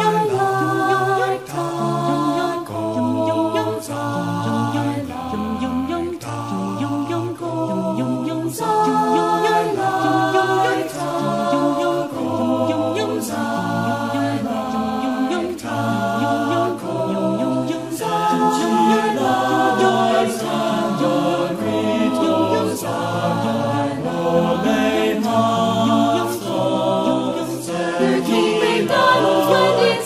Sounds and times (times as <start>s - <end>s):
Music: 0.0s - 30.0s.